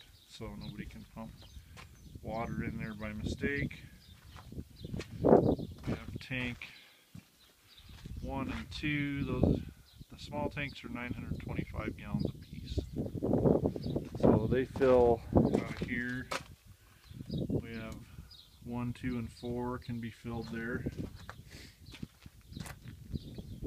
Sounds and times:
Speech: 0:00.3 - 0:01.4, 0:02.2 - 0:03.9, 0:05.8 - 0:06.8, 0:08.2 - 0:12.9, 0:14.2 - 0:16.4, 0:17.6 - 0:21.0.

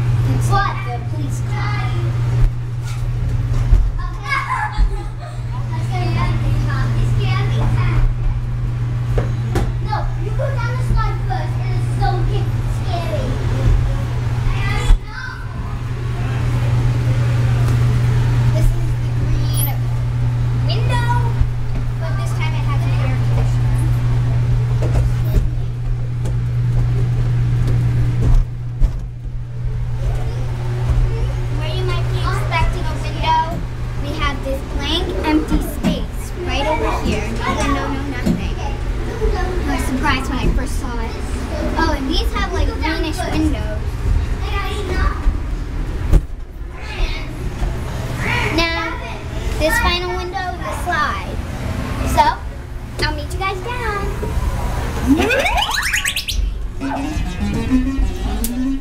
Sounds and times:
Child speech, kid speaking: 0:00.2 - 0:02.4, 0:03.9 - 0:08.2, 0:09.5 - 0:16.5, 0:18.4 - 0:20.0, 0:20.6 - 0:24.4, 0:25.2 - 0:25.8, 0:30.0 - 0:45.5, 0:46.7 - 0:47.6, 0:48.2 - 0:54.6.

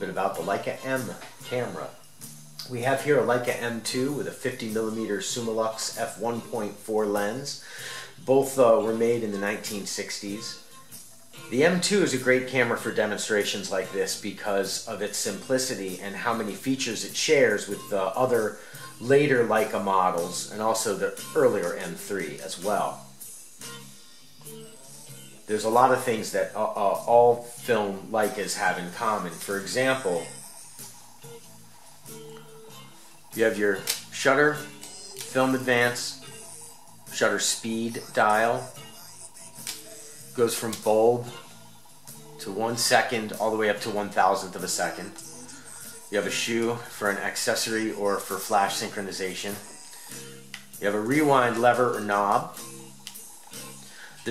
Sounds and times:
Speech: 0:00.0 - 0:02.0, 0:02.6 - 0:07.6, 0:08.2 - 0:10.6, 0:11.5 - 0:23.0, 0:25.5 - 0:30.4, 0:33.4 - 0:36.3, 0:37.1 - 0:38.8, 0:40.4 - 0:41.4, 0:42.4 - 0:45.3, 0:46.1 - 0:49.8, 0:50.8 - 0:52.6
Music: 0:00.0 - 0:54.3.

